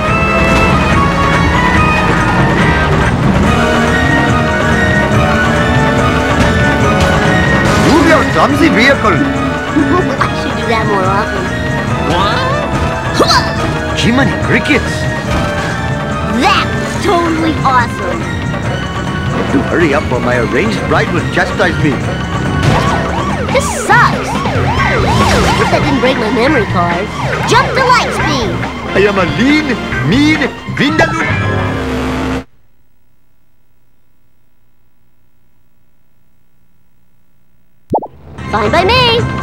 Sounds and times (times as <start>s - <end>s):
Music: 0.0s - 32.5s, 38.2s - 39.4s.